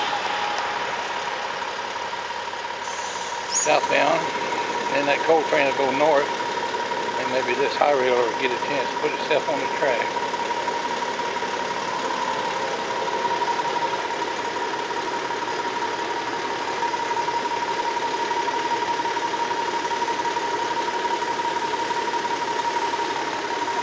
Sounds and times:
Speech: 3.6s - 4.3s, 4.9s - 6.3s, 7.2s - 10.1s.

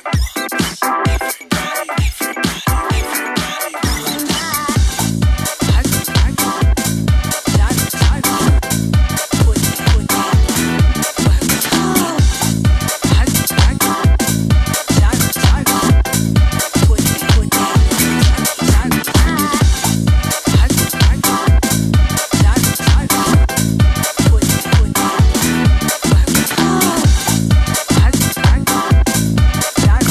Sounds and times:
Music: 0.0s - 30.1s.

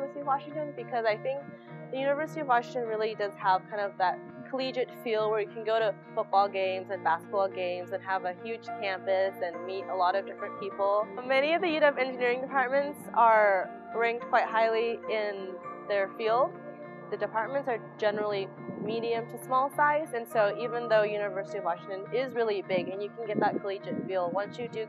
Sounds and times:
Speech: 0.0s - 1.4s, 2.0s - 16.5s, 17.1s - 24.8s
Music: 0.0s - 24.8s.

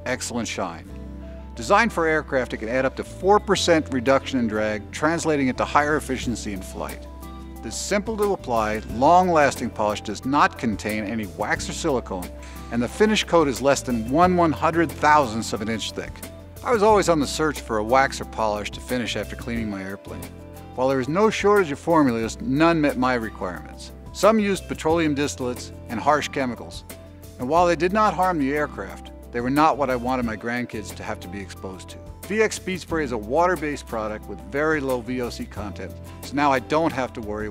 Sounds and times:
Speech: 0.0s - 0.9s, 1.6s - 7.0s, 7.7s - 26.8s, 27.4s - 37.5s
Music: 0.0s - 37.5s.

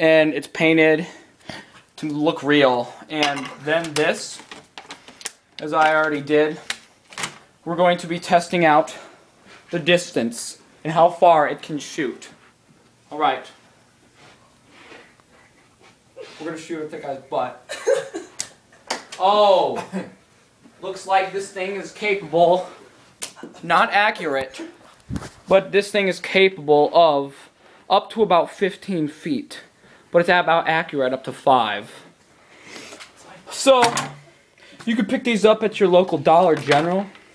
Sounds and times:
Speech: 0.0s - 1.2s, 2.0s - 4.4s, 5.6s - 6.7s, 7.6s - 9.1s, 9.7s - 12.4s, 13.1s - 13.6s, 16.3s - 17.7s, 19.2s - 20.2s, 20.8s - 22.8s, 23.5s - 24.8s, 25.5s - 32.1s, 33.2s - 34.1s, 34.8s - 37.2s
Inside, small room: 0.0s - 37.3s.

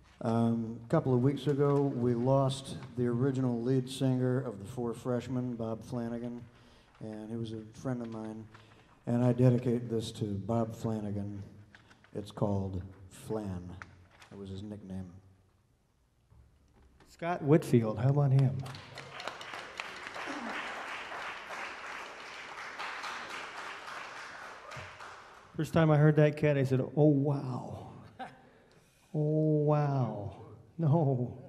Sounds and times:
Speech: 0.2s - 11.5s, 12.1s - 15.2s, 17.1s - 18.8s, 25.6s - 28.3s, 29.1s - 31.4s.

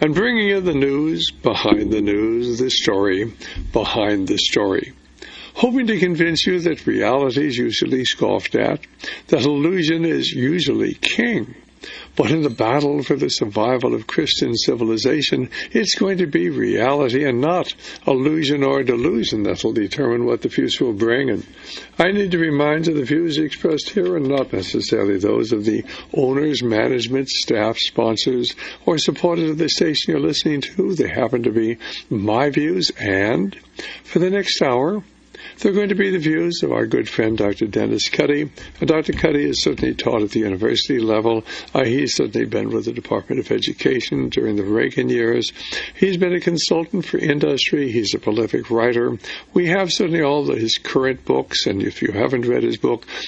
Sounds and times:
Speech: 0.0s - 53.2s.

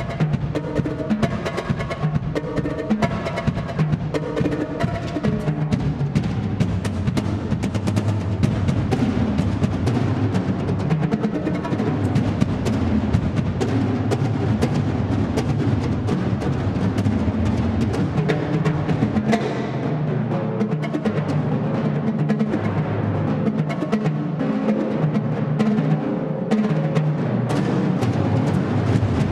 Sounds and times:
Drum roll: 0.0s - 29.3s.

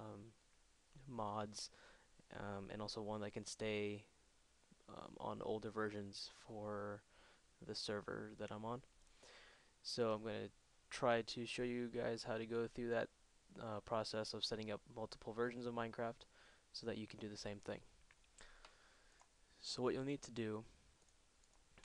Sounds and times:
Speech: 0.0s - 0.4s, 1.0s - 4.1s, 4.8s - 8.9s, 9.8s - 17.9s, 19.6s - 20.8s.

